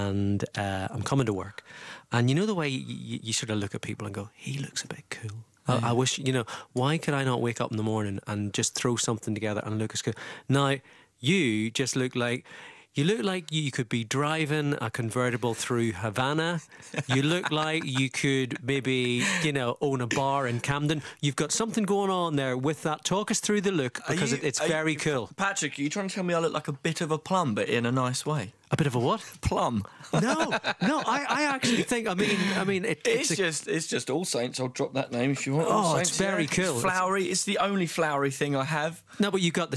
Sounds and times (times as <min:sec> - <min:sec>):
Speech: 0:00.0 - 0:39.7.